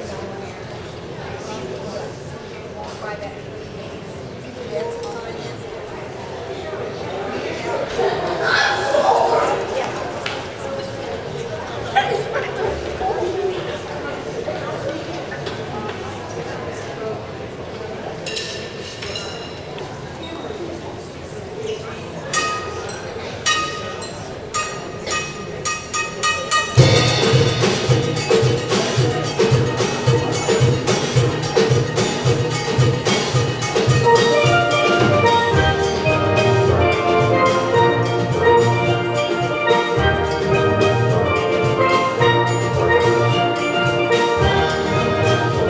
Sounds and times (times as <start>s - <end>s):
Speech: 0.0s - 32.0s
Drum kit: 26.7s - 45.7s
Drum: 26.8s - 45.7s.